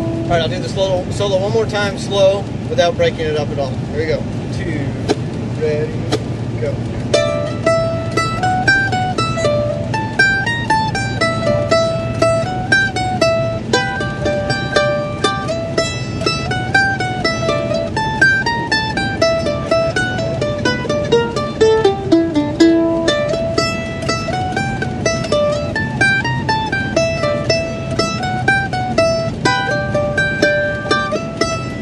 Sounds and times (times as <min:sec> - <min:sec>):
Mandolin: 0:00.0 - 0:31.8.